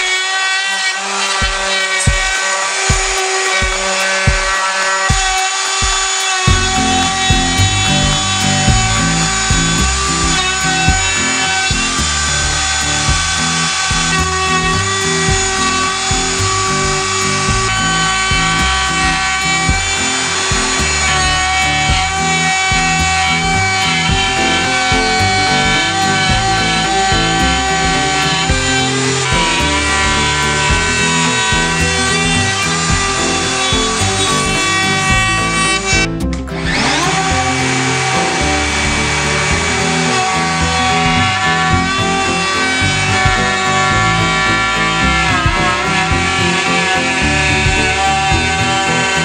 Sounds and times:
Music: 0.0s - 49.2s
Wood: 0.0s - 49.2s.

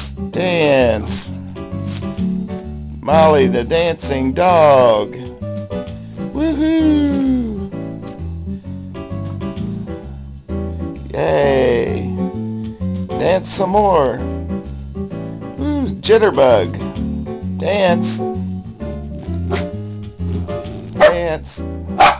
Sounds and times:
Inside, small room: 0.0s - 22.2s
Music: 0.0s - 22.2s
Speech: 0.4s - 1.3s, 3.0s - 5.2s, 11.1s - 12.1s, 13.2s - 14.2s, 15.6s - 16.8s, 17.6s - 18.2s, 21.0s - 21.7s
Canidae, dogs, wolves: 18.9s - 21.2s, 22.0s - 22.2s
Dog: 18.9s - 21.3s, 22.0s - 22.2s.

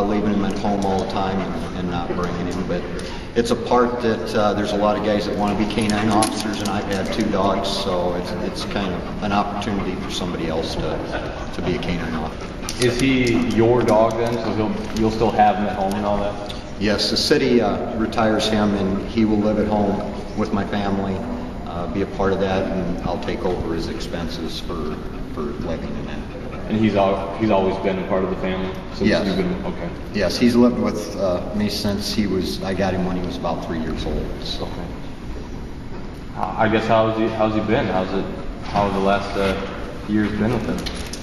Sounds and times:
Speech: 0.0s - 35.0s, 36.4s - 41.0s.

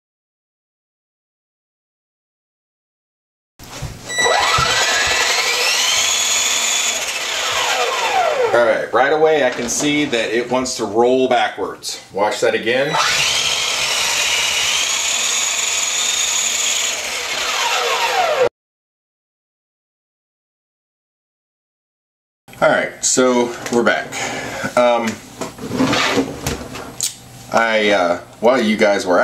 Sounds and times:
Speech: 8.5s - 13.0s, 22.6s - 25.2s, 27.5s - 29.2s.

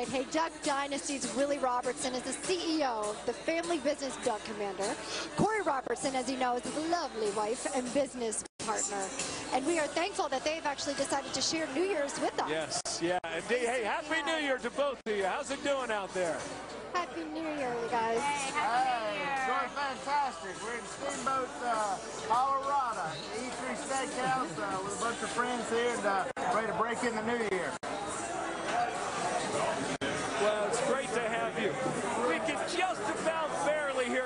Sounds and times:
Music: 0.0s - 34.2s.

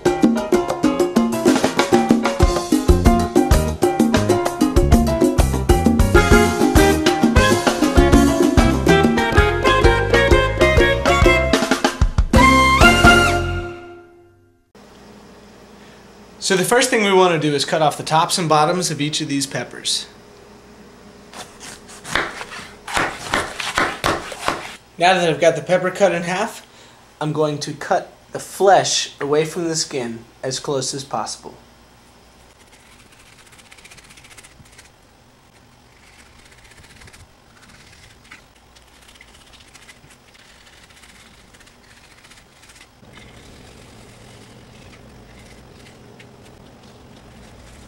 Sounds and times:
Speech: 16.4s - 20.2s, 25.0s - 26.6s, 27.2s - 31.6s.

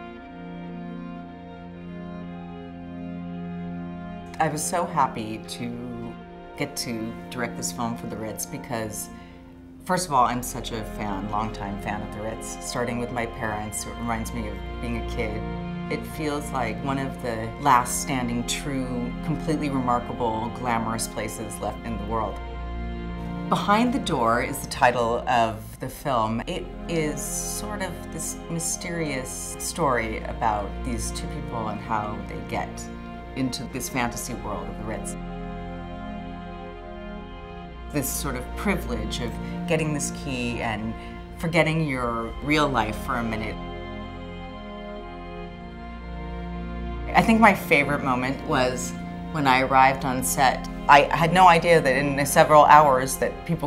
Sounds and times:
Music: 0.0s - 53.6s
Speech: 4.4s - 9.1s, 9.9s - 22.4s, 23.5s - 35.2s, 38.0s - 43.6s, 47.1s - 53.6s.

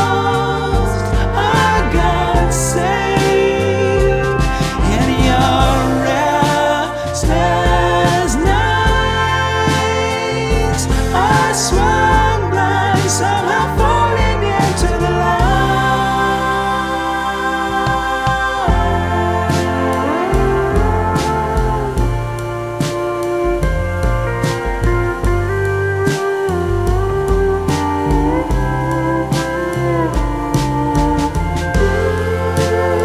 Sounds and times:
Music: 0.0s - 33.0s.

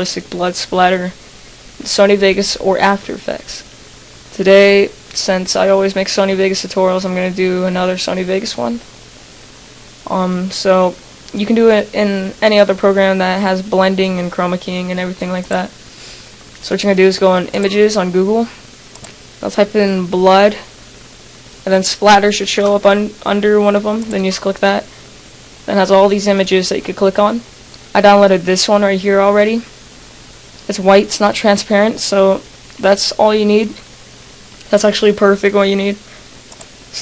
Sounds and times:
Speech: 0.0s - 1.2s, 1.8s - 3.7s, 4.4s - 8.9s, 10.0s - 15.8s, 16.6s - 18.6s, 19.4s - 20.7s, 21.6s - 24.9s, 25.7s - 29.7s, 30.7s - 33.9s, 34.7s - 36.1s.

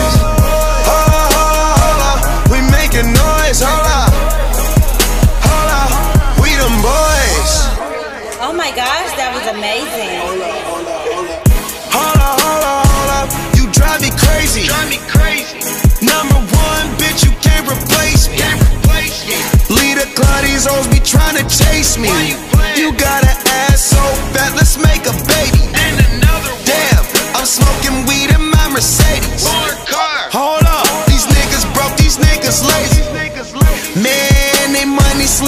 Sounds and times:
Music: 0.0s - 35.4s
Speech: 7.6s - 11.5s.

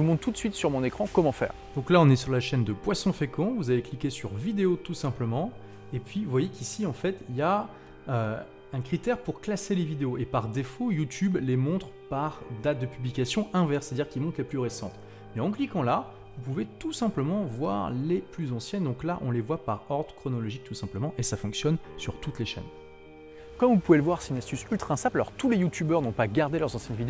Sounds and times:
Speech: 0.0s - 22.7s, 23.6s - 27.0s
Music: 0.0s - 27.0s.

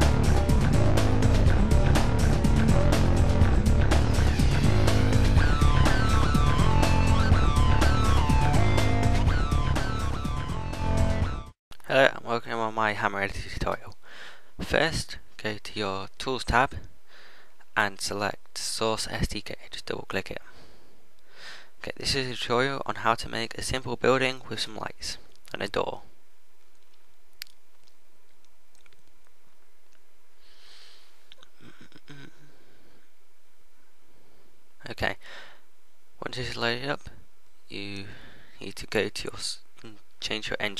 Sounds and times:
Speech: 11.8s - 14.0s, 14.6s - 16.9s, 17.8s - 20.5s, 21.8s - 26.1s, 34.8s - 35.2s, 36.2s - 40.7s.

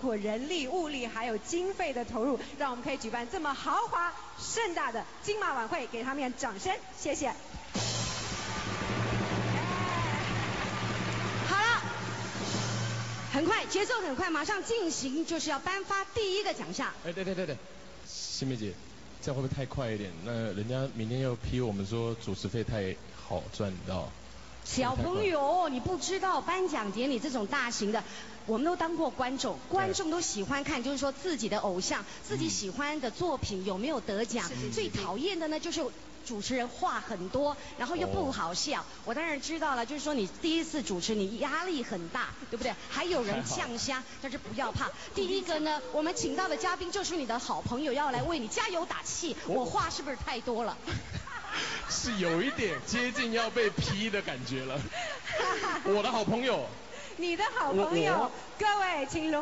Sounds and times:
Speech: 24.7s - 50.7s, 55.6s - 59.4s.

